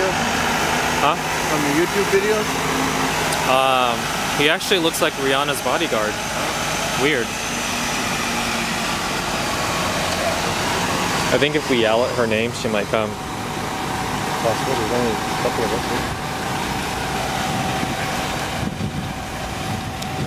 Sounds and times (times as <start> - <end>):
Bus: 0.0 - 20.2
Speech: 1.0 - 2.6, 3.5 - 6.2, 7.0 - 7.4, 11.3 - 13.2, 14.4 - 16.1.